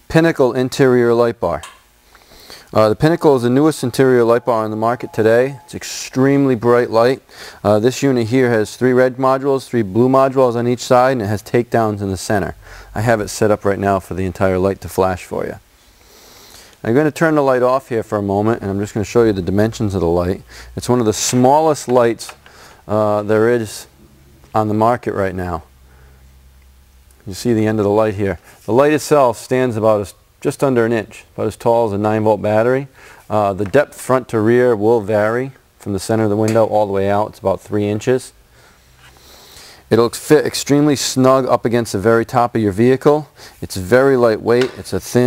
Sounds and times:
Speech: 0.1 - 1.7, 2.7 - 15.6, 16.8 - 23.9, 24.6 - 25.7, 27.2 - 38.4, 39.9 - 45.2.

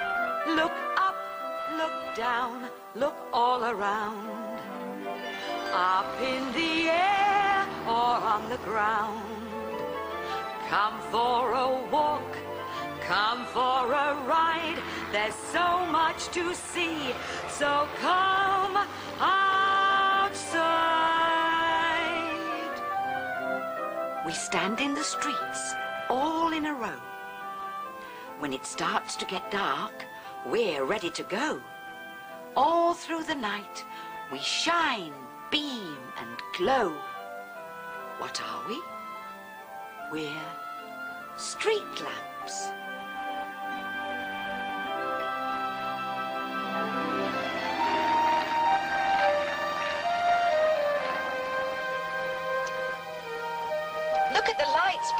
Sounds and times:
Music: 0.0 - 55.1.

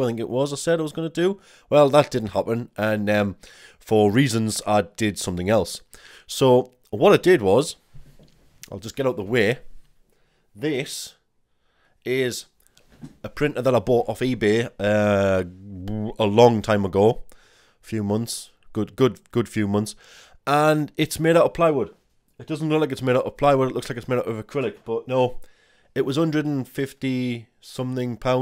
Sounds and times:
Speech: 0.0 - 7.8, 8.6 - 9.7, 10.6 - 11.2, 12.1 - 12.5, 13.2 - 25.4, 26.0 - 28.4.

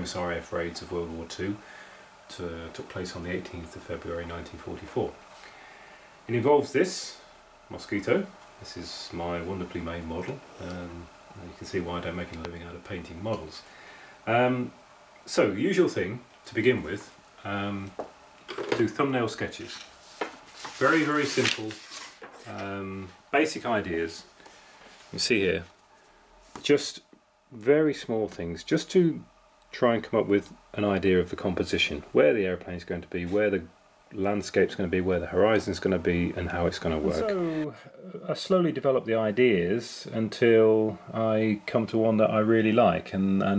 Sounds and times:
Speech: 0.0 - 1.6, 2.3 - 5.2, 6.3 - 13.7, 14.3 - 18.0, 18.6 - 19.9, 20.8 - 21.8, 22.4 - 24.3, 25.1 - 25.7, 26.6 - 43.5.

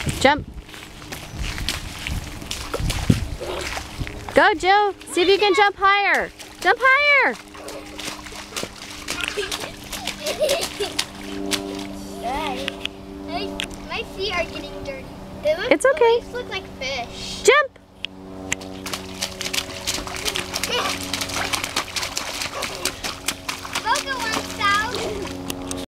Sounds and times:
Water: 0.0 - 17.6, 18.4 - 25.9
Slosh: 18.8 - 25.3.

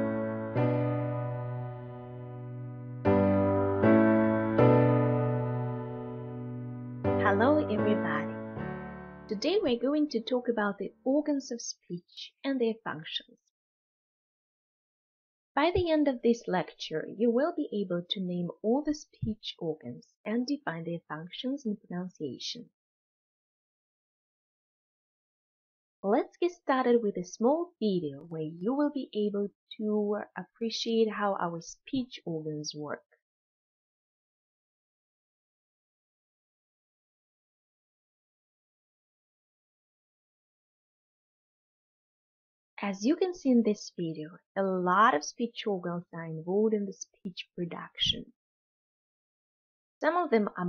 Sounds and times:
Narration, monologue: 7.1 - 11.7, 15.7 - 20.2, 26.0 - 28.8, 42.8 - 45.8, 46.4 - 48.3
Female speech, woman speaking: 7.2 - 8.3, 9.3 - 13.3, 15.6 - 22.7, 26.0 - 33.0, 42.8 - 48.3, 50.0 - 50.6.

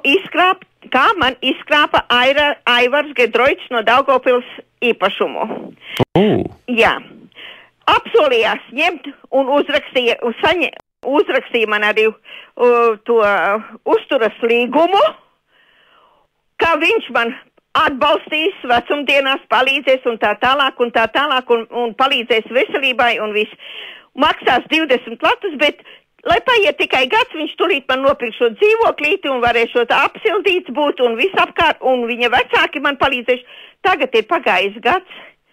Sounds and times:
Speech: 0.0 - 5.6, 6.2 - 7.2, 7.9 - 15.2, 16.6 - 23.6, 24.2 - 35.3.

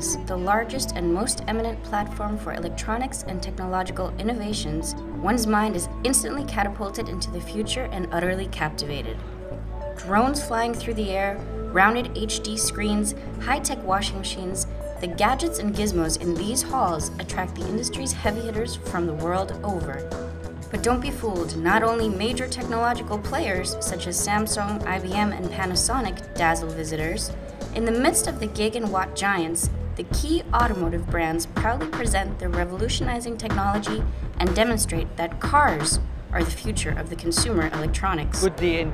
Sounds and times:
Speech: 0.0 - 9.2, 10.0 - 20.1, 20.7 - 38.9
Music: 0.0 - 38.9.

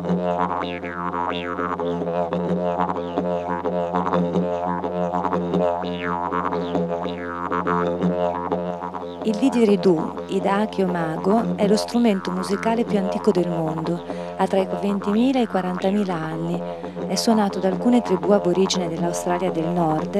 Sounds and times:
Didgeridoo: 0.0 - 20.1
Speech: 9.2 - 20.1.

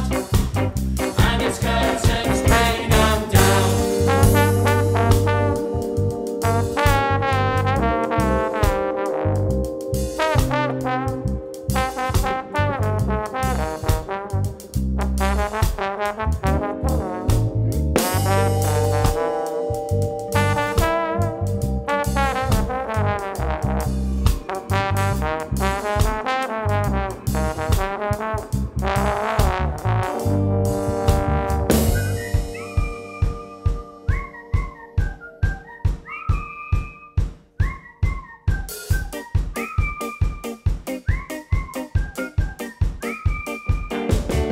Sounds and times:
Music: 0.0 - 44.5.

